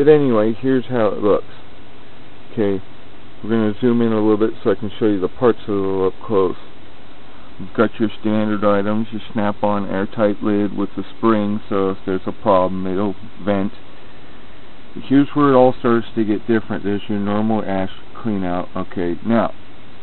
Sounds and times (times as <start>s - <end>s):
Speech: 0.0s - 1.7s, 2.5s - 6.7s, 7.6s - 13.8s, 15.0s - 19.6s.